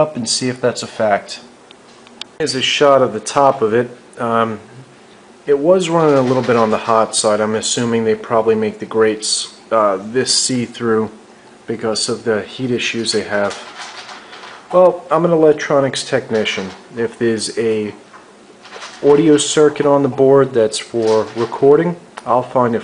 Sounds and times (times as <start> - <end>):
Speech: 0.0 - 1.5, 2.4 - 4.9, 5.5 - 13.7, 14.7 - 18.0, 19.0 - 22.8.